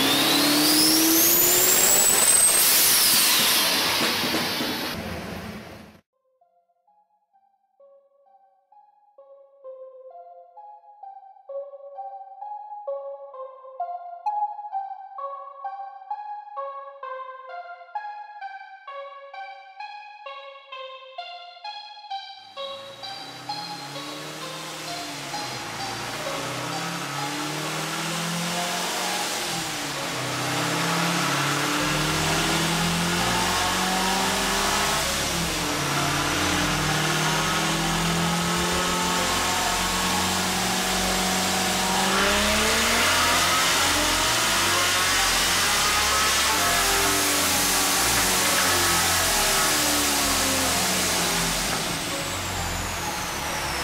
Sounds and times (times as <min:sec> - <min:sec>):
Music: 0:00.0 - 0:05.0, 0:05.9 - 0:53.8
Car: 0:00.0 - 0:06.0, 0:22.6 - 0:53.8.